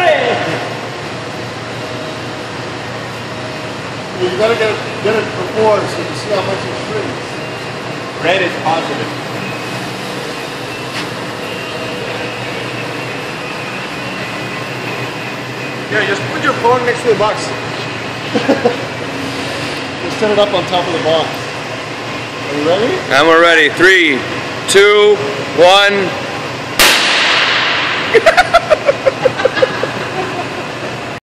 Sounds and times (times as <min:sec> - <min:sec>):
Burst, pop: 0:26.8 - 0:28.2.